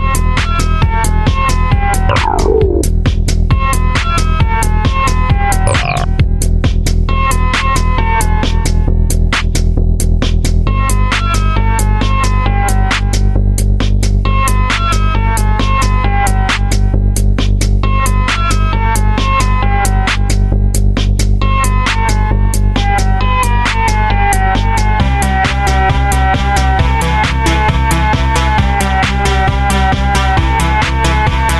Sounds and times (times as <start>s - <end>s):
Disco: 2.1s - 2.9s, 5.7s - 6.1s.